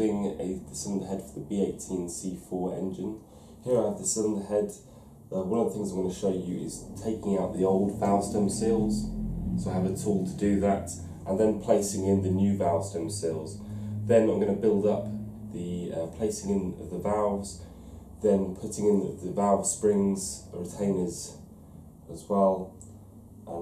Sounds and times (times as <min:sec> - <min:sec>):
Speech: 0:00.0 - 0:17.6, 0:18.2 - 0:21.4, 0:22.1 - 0:22.8.